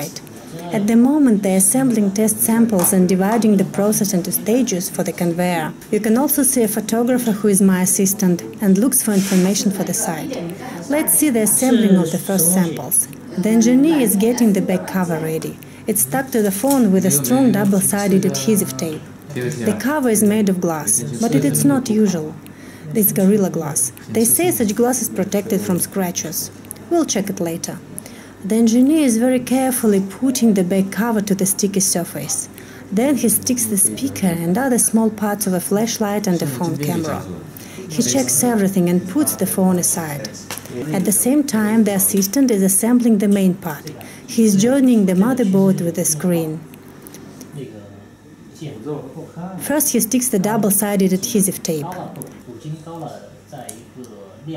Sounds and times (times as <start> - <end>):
Speech: 0.0 - 27.8, 28.4 - 46.7, 48.6 - 54.5.